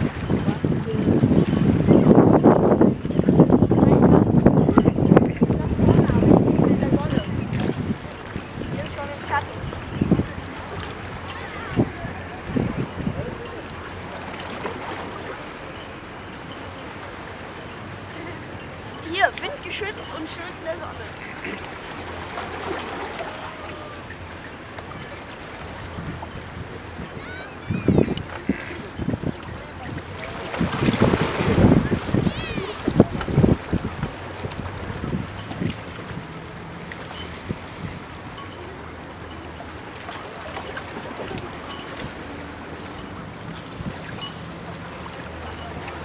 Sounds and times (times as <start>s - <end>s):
Waves, surf: 0.0s - 46.0s.